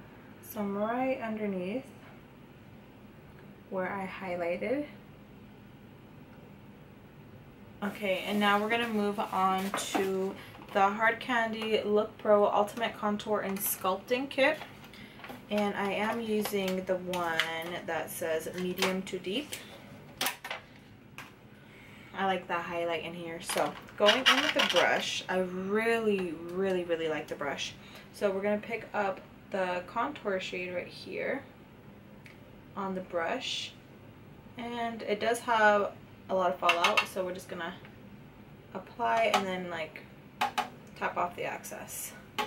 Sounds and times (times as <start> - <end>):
Speech: 0.4 - 2.0, 3.7 - 5.0, 7.8 - 14.6, 15.5 - 19.6, 22.2 - 31.5, 32.8 - 33.8, 34.6 - 37.8, 38.7 - 40.0, 41.0 - 42.2.